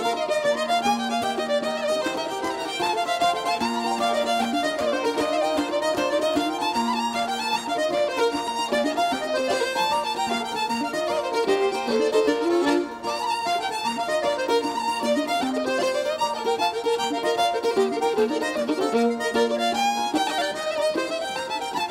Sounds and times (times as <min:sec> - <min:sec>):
Pizzicato: 0:00.0 - 0:21.9.